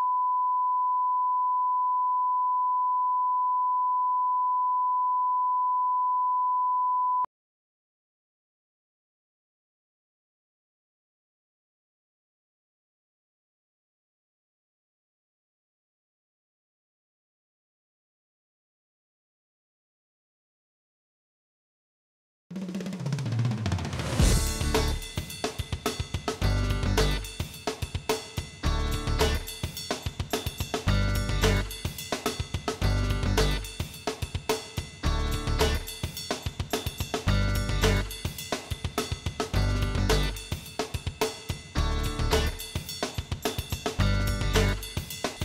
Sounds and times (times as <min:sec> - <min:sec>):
Music: 0:22.6 - 0:45.4.